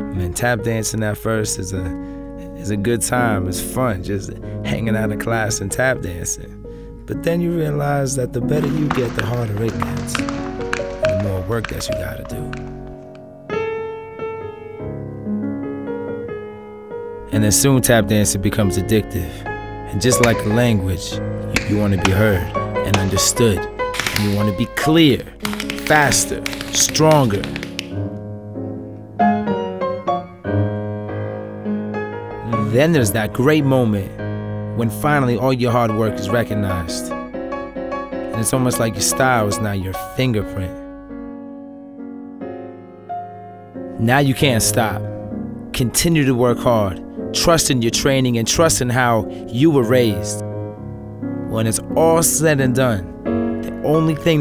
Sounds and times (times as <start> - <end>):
Music: 0.0 - 54.4
Speech: 0.1 - 10.2, 11.0 - 12.5, 17.3 - 27.6, 32.5 - 34.2, 34.8 - 37.1, 38.3 - 40.8, 44.0 - 45.1, 45.7 - 50.4, 51.5 - 53.1, 53.7 - 54.4.